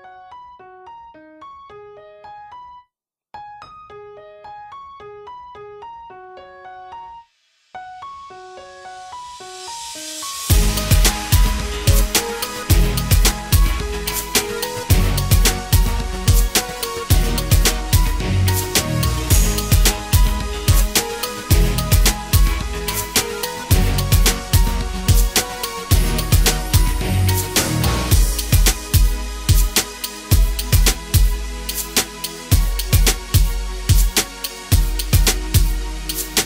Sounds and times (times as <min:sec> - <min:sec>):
Music: 0:00.0 - 0:36.4.